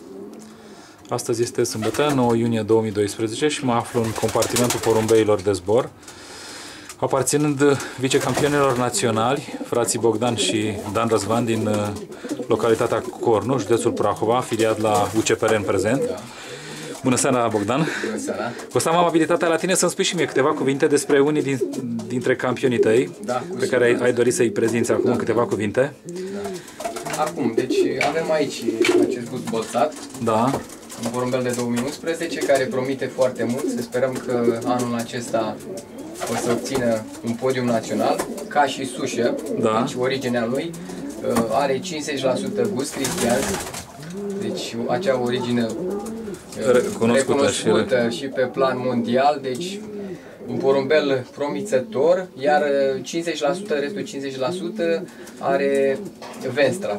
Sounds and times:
Speech: 1.1 - 5.9, 7.0 - 16.3, 17.0 - 35.6, 36.3 - 43.6, 44.4 - 45.8, 46.6 - 49.9, 50.5 - 56.9.

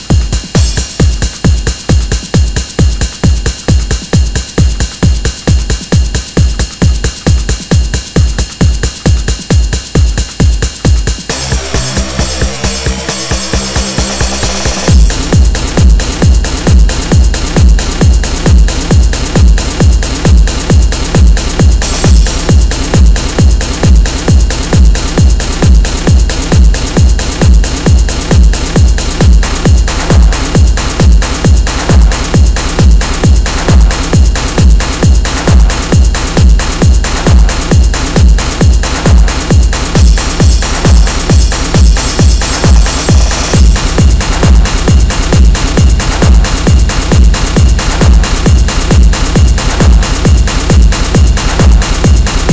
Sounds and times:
Techno: 0.0 - 52.5.

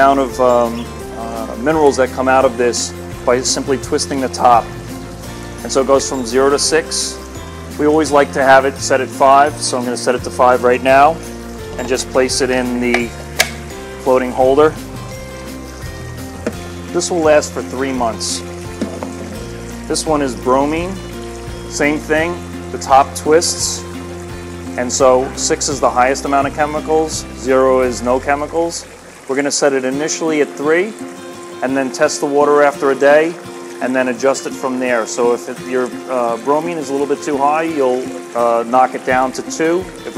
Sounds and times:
Water: 0.0 - 40.1.

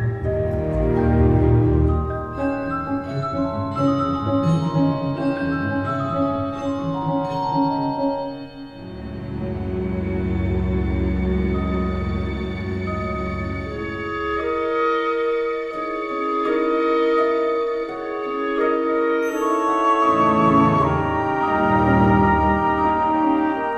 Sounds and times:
Music: 0.0 - 23.7.

